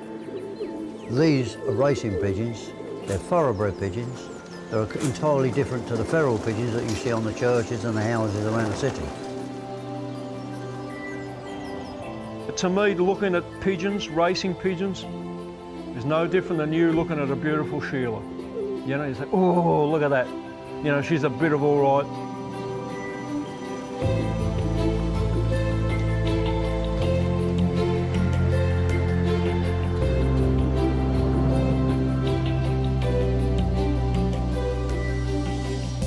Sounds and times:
Music: 0.0 - 36.0.

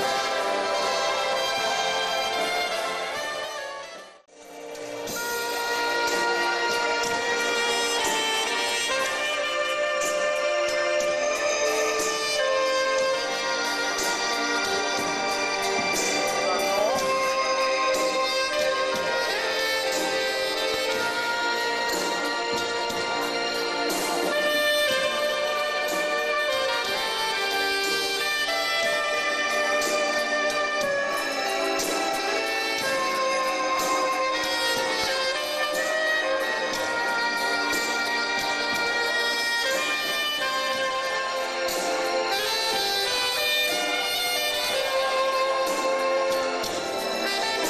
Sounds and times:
Orchestra: 0.0 - 47.7.

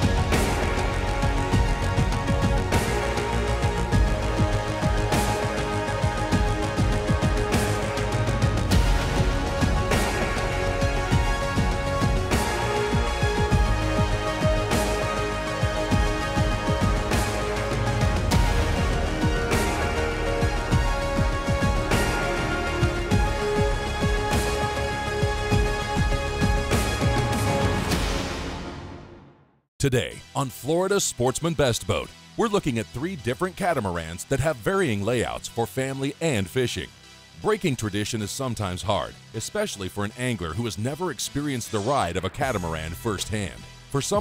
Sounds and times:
Music: 0.0 - 44.2
Speech: 29.8 - 44.2.

